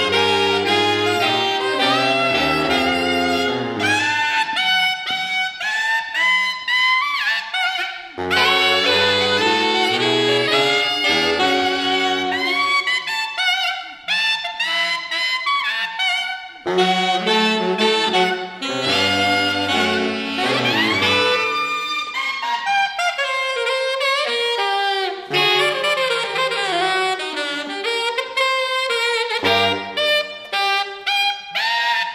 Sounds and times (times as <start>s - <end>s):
Brass instrument: 0.0s - 32.1s
Saxophone: 0.0s - 32.1s.